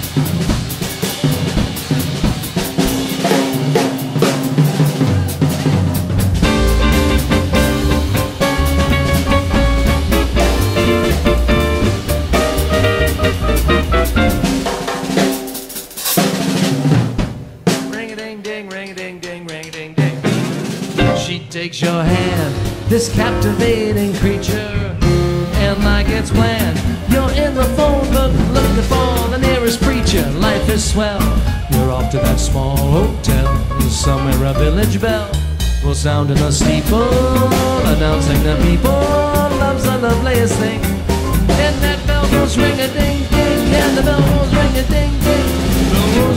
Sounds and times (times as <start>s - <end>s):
Independent music: 0.0s - 46.3s
Guitar: 6.2s - 14.9s, 21.0s - 46.3s
Singing: 17.8s - 20.4s, 21.0s - 40.9s, 41.5s - 46.3s.